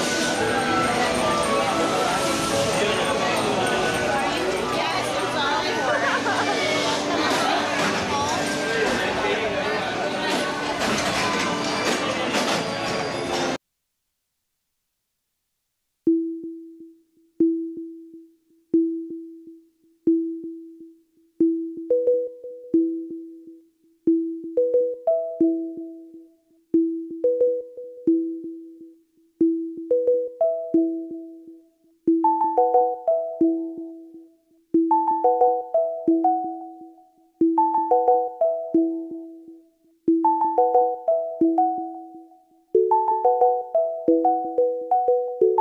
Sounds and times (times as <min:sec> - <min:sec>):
Inside, public space: 0:00.0 - 0:13.6
Music: 0:00.0 - 0:13.6, 0:16.1 - 0:45.6
Speech: 0:00.4 - 0:12.5.